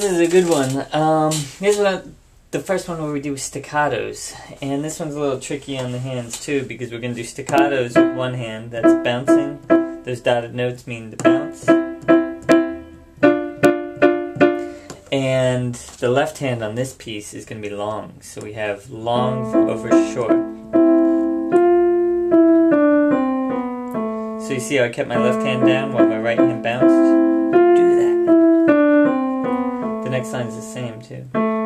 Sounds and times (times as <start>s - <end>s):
Speech: 0.0s - 11.7s, 15.1s - 20.4s, 24.4s - 27.2s, 27.8s - 28.2s, 30.0s - 31.4s
Music: 7.6s - 10.1s, 11.2s - 14.8s, 19.2s - 31.6s.